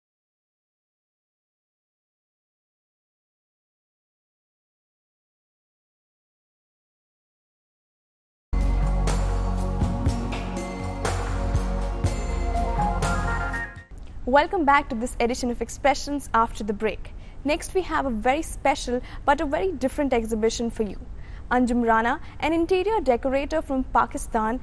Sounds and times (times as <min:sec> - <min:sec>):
Music: 0:08.6 - 0:13.9
Speech: 0:14.3 - 0:24.6.